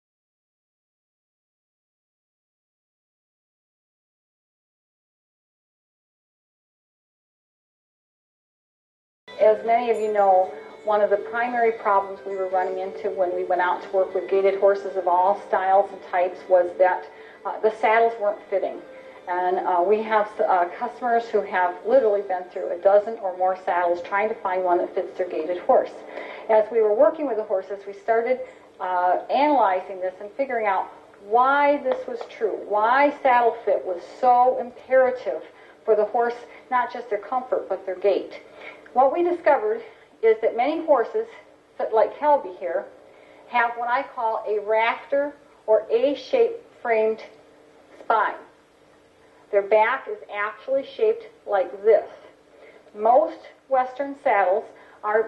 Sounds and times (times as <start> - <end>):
Speech: 9.4 - 42.9, 43.5 - 47.4, 48.0 - 48.5, 49.6 - 52.3, 53.0 - 55.2.